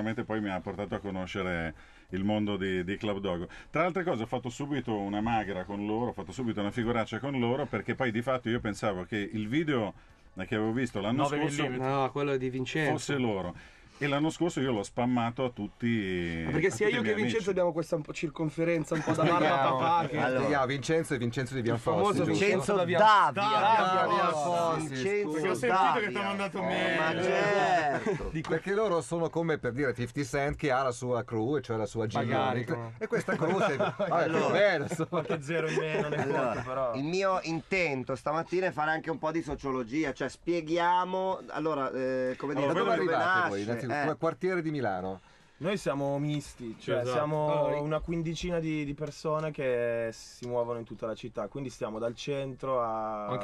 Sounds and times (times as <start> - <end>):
Speech: 0.0 - 53.4.